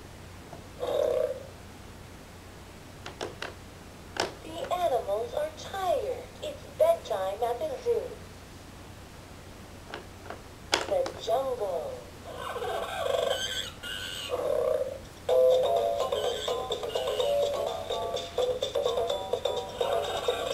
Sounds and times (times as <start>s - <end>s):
Speech: 4.4s - 8.2s, 10.8s - 12.1s.